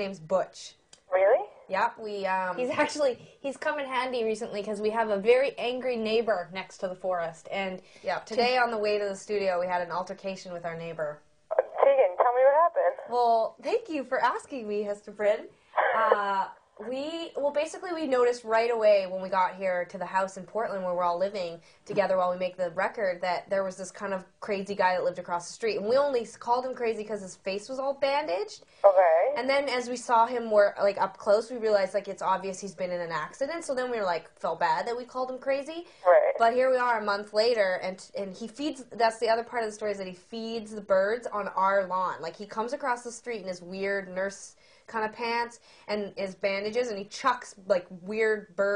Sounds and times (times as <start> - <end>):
Inside, small room: 0.0 - 48.7
Speech: 0.0 - 48.7.